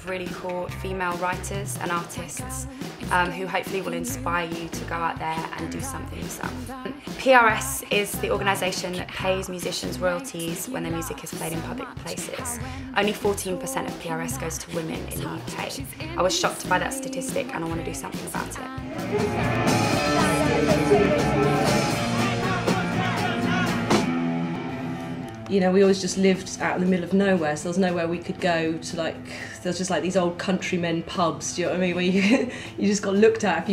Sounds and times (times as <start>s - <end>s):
Speech: 0.0s - 18.8s, 25.5s - 33.7s
Dance music: 1.2s - 24.8s
Rock and roll: 18.2s - 25.4s.